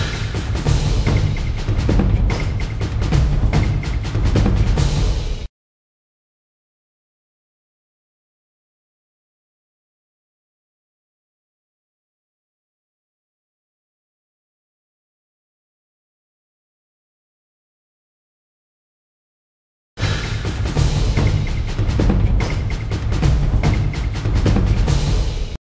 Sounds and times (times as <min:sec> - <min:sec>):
Music: 0:00.0 - 0:05.5, 0:20.0 - 0:25.6.